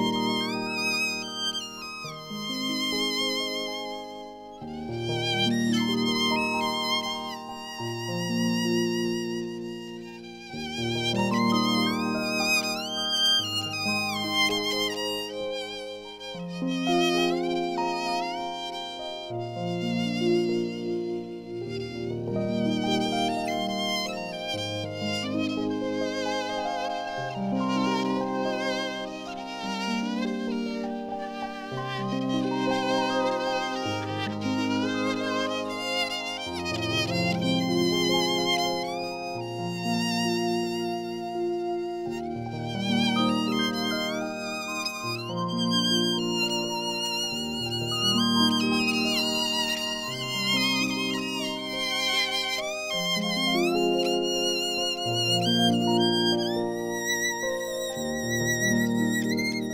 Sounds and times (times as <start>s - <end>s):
Violin, fiddle: 0.0s - 59.7s.